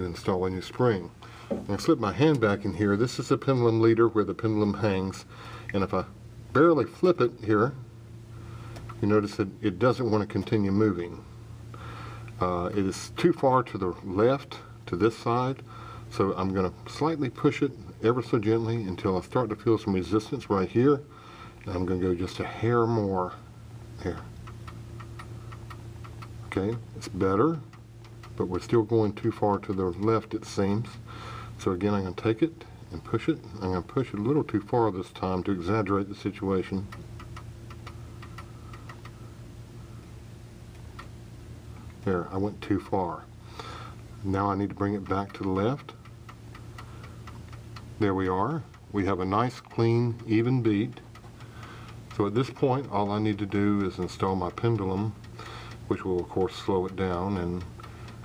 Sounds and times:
Speech: 0.0 - 7.9, 9.0 - 11.3, 12.4 - 23.4, 24.0 - 24.3, 26.5 - 27.7, 28.4 - 31.0, 31.6 - 36.9, 42.0 - 43.3, 44.2 - 46.0, 48.0 - 51.0, 52.1 - 55.2, 55.9 - 57.7.

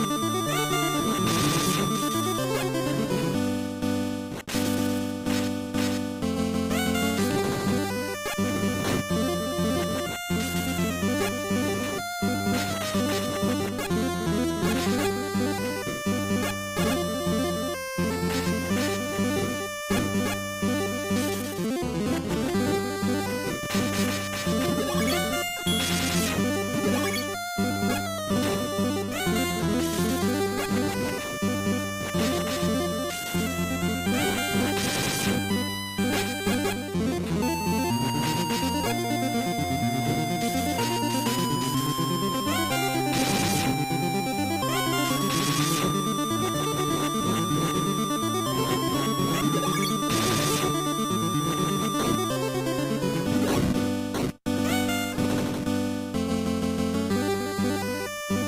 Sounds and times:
Music: 0.0 - 58.4.

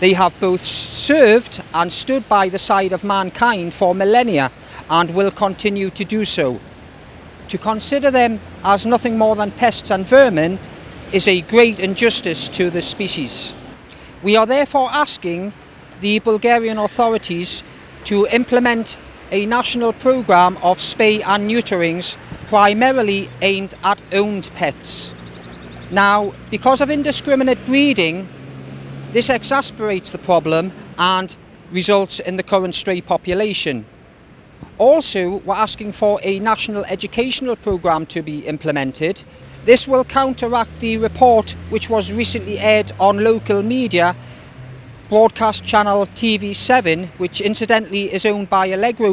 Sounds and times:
Speech: 0.0 - 6.6, 7.5 - 13.5, 14.2 - 25.2, 25.9 - 28.3, 29.2 - 33.9, 34.8 - 44.2, 45.1 - 49.1.

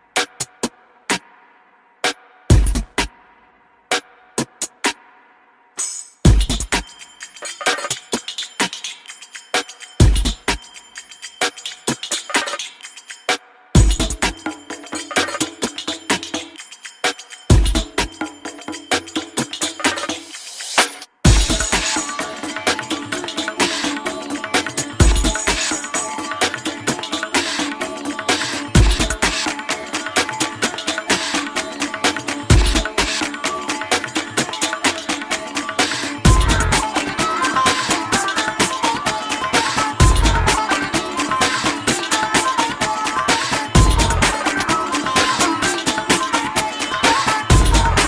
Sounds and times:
Music: 0.0 - 48.0.

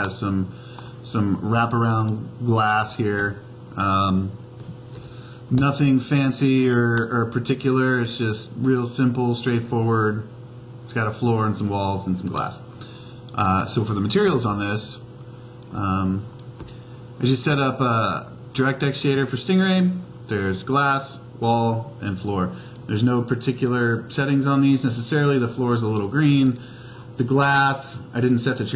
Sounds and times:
Speech: 0.0 - 4.4, 5.5 - 12.7, 13.3 - 15.1, 15.7 - 16.3, 17.2 - 26.6, 27.2 - 28.7.

